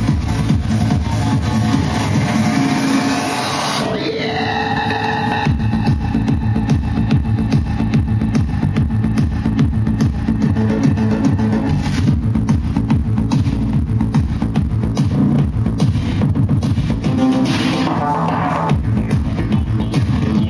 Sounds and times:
Disco: 0.0 - 20.5
Electronic music: 0.0 - 20.5.

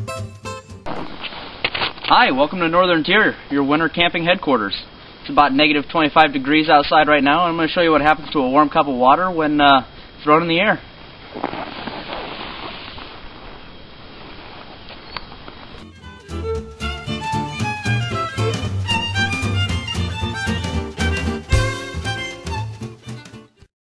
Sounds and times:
Music: 0.0 - 0.9, 15.8 - 23.7.

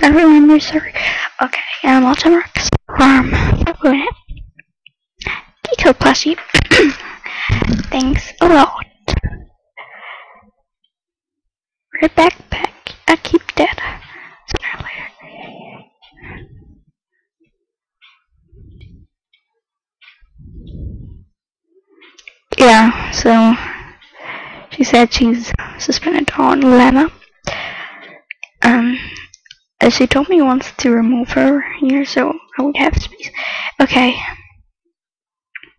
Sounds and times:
Speech: 0.0 - 4.3, 5.6 - 6.5, 7.8 - 9.5, 12.0 - 15.1, 22.5 - 23.9, 24.7 - 27.2, 28.6 - 29.1, 29.8 - 34.6.

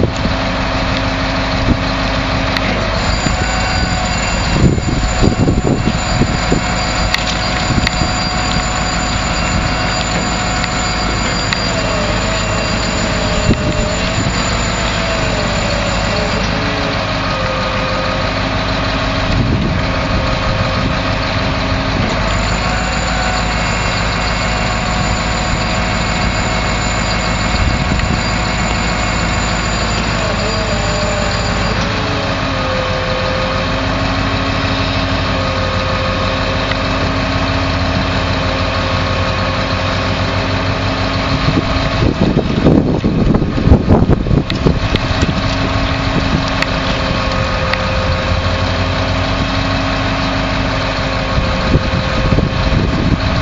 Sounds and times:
Vehicle: 0.0 - 53.4.

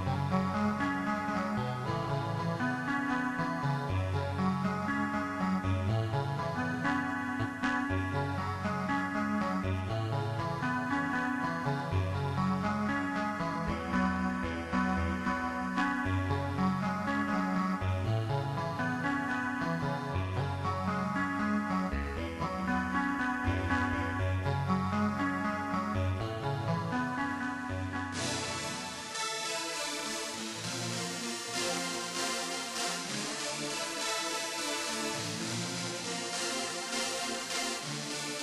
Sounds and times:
Music: 0.0 - 38.4.

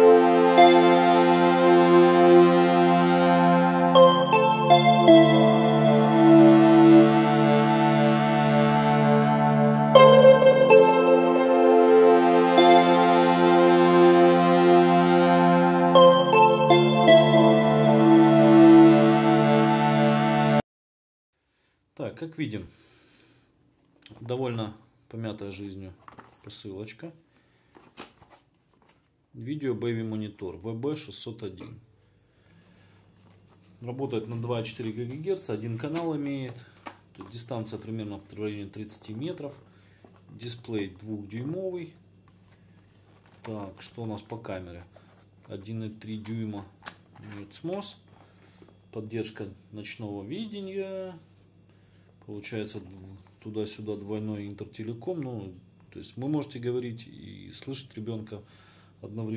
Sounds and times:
Speech: 22.0 - 22.7, 24.0 - 27.2, 29.4 - 31.8, 33.8 - 36.6, 37.2 - 39.6, 40.3 - 42.0, 43.5 - 44.9, 45.5 - 48.0, 49.0 - 51.2, 52.2 - 59.3.

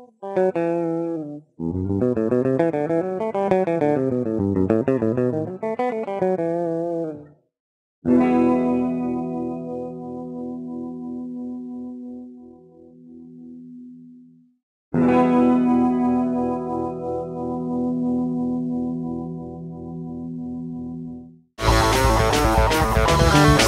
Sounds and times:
Strum: 21.6 - 23.6.

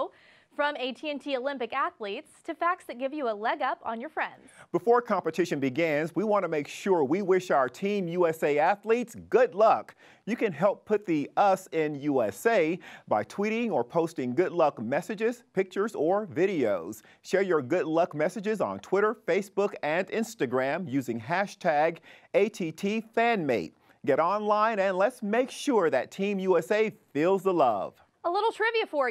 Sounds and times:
Speech: 0.0 - 29.1.

